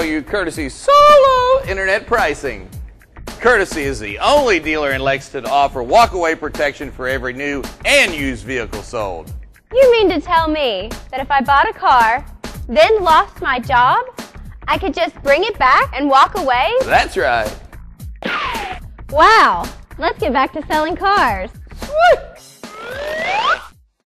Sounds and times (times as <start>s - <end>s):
Music: 0.0s - 24.0s.